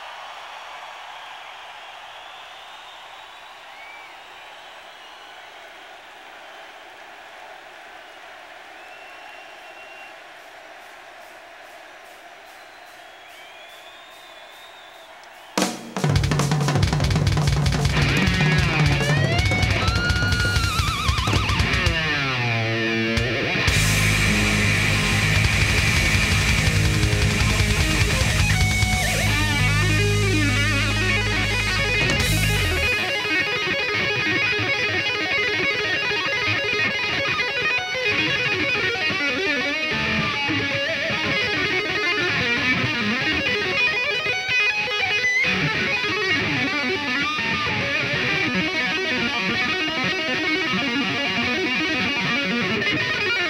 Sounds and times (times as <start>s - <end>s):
Tapping (guitar technique): 16.1s - 22.4s.